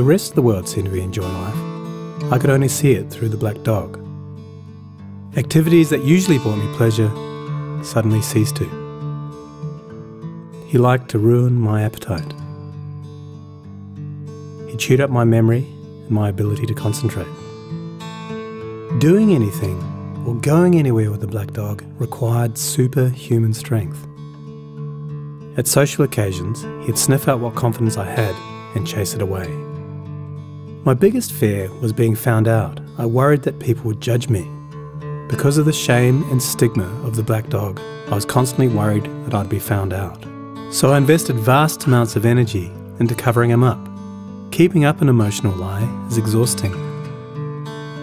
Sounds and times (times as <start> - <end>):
Speech: 0.0 - 1.6, 2.2 - 4.0, 5.4 - 7.2, 7.8 - 8.8, 10.7 - 12.4, 14.7 - 17.4, 18.9 - 24.1, 25.6 - 29.6, 30.8 - 34.6, 35.3 - 43.9, 44.5 - 46.9
Music: 0.0 - 48.0.